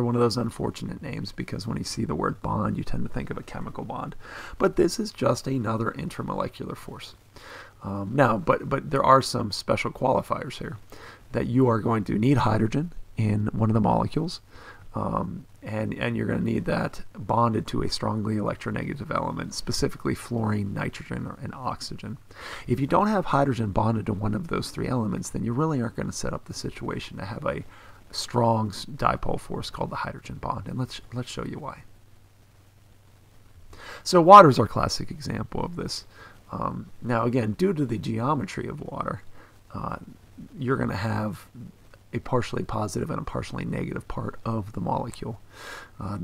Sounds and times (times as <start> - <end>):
Narration, monologue: 0.0 - 46.2.